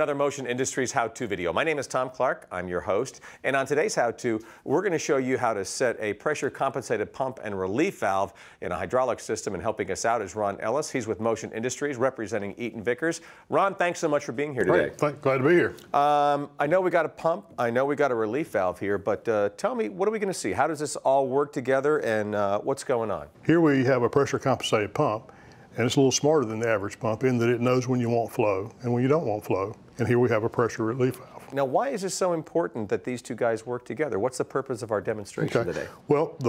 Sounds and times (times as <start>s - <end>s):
Speech: 0.0s - 36.4s.